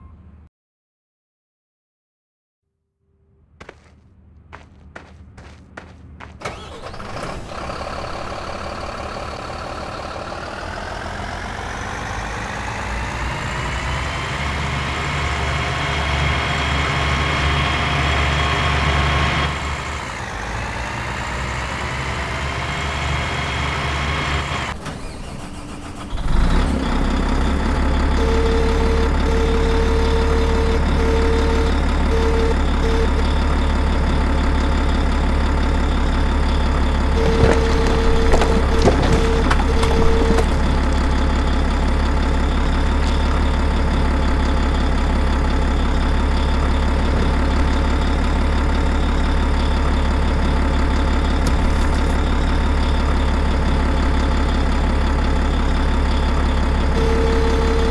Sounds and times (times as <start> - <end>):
Truck: 0.0 - 0.5, 3.1 - 57.9.